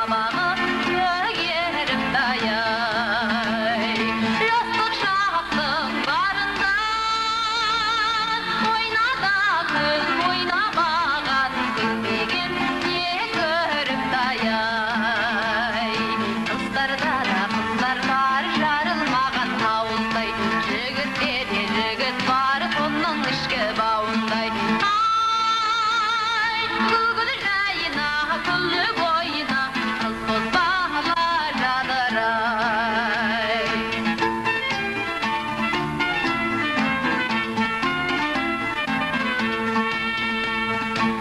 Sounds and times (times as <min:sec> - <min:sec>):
Traditional music: 0:00.0 - 0:41.2.